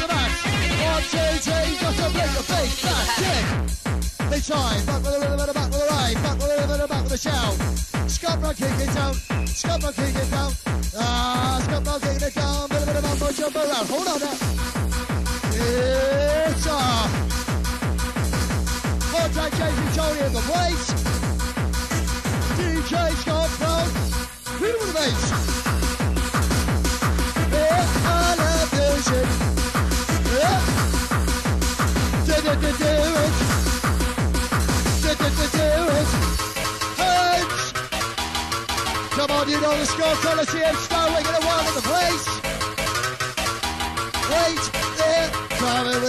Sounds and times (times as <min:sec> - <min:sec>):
Techno: 0:00.0 - 0:46.0.